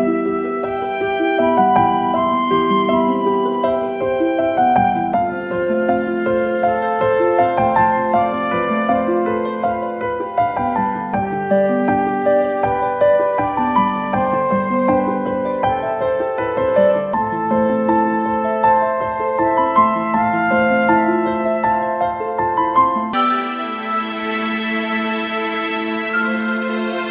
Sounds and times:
Music: 0.0s - 27.1s.

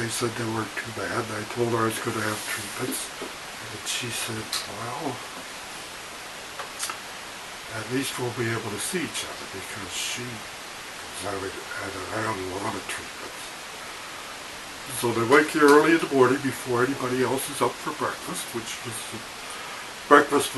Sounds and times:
Speech: 0.0s - 5.3s, 7.7s - 13.6s, 14.9s - 19.3s, 20.1s - 20.5s
Pink noise: 0.0s - 20.5s.

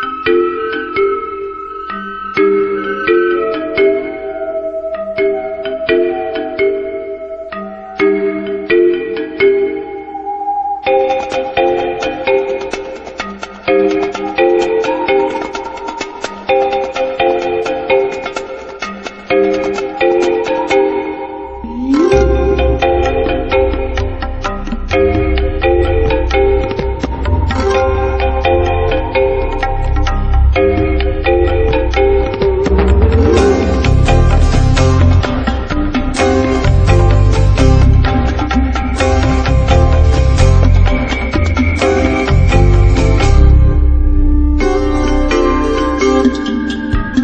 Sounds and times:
Music: 0.0s - 47.2s.

